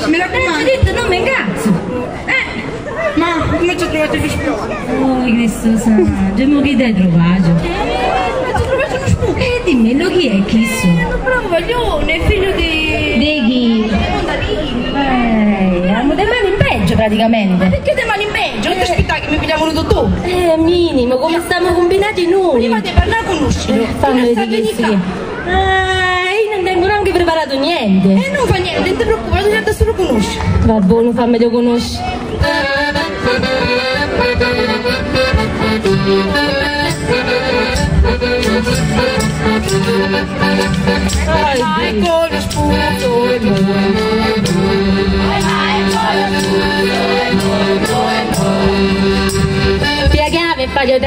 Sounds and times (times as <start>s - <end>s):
Crowd: 0.0s - 51.0s
Folk music: 31.8s - 51.0s.